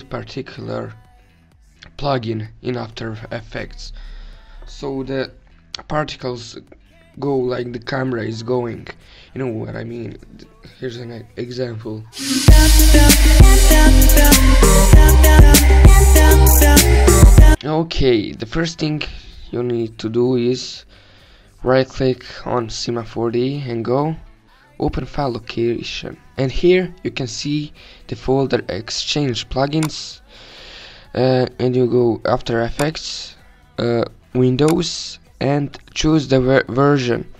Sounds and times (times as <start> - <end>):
Speech: 0.0 - 1.1, 1.8 - 4.0, 4.6 - 12.2, 17.6 - 20.9, 21.6 - 30.2, 31.2 - 37.3
Music: 0.0 - 37.3.